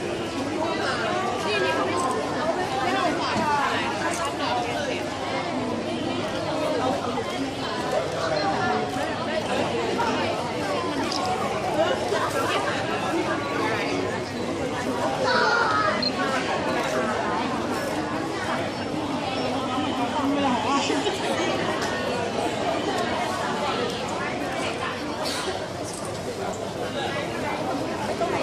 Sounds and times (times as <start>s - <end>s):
Speech: 0.0s - 28.4s.